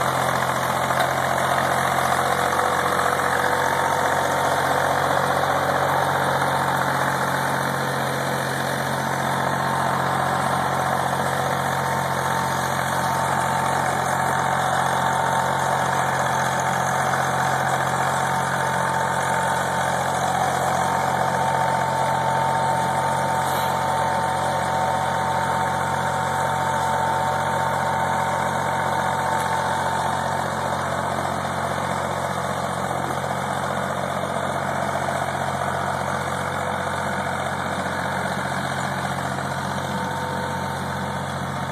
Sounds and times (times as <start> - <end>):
Vehicle: 0.0 - 41.7.